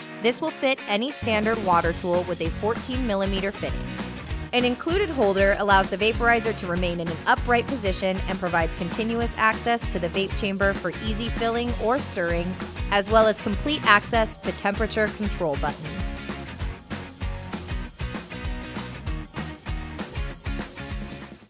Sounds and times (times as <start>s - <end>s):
Music: 0.0s - 21.5s
Speech: 0.2s - 3.8s, 4.6s - 16.2s.